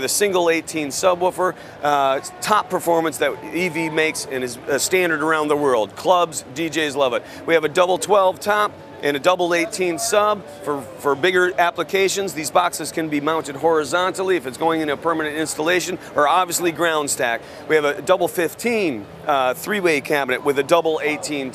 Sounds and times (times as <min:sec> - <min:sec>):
Speech: 0:00.0 - 0:21.5.